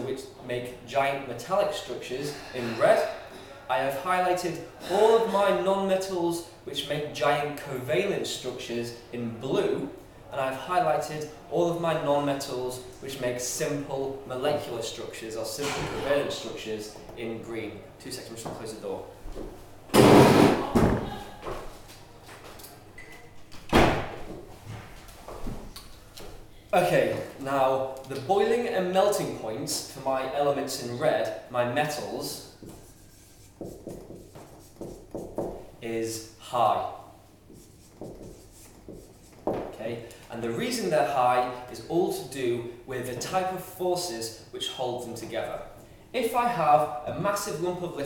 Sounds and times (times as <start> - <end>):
Speech: 0.0 - 19.1, 26.8 - 32.5, 35.8 - 37.1, 39.7 - 48.0.